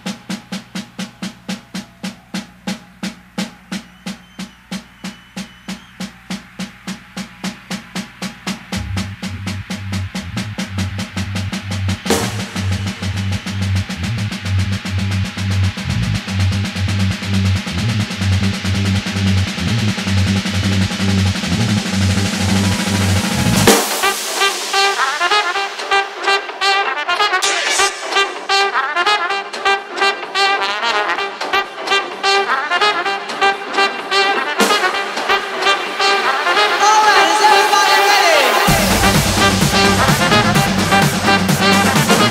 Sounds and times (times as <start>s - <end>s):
Cymbal: 0.0s - 28.7s, 37.7s - 42.3s.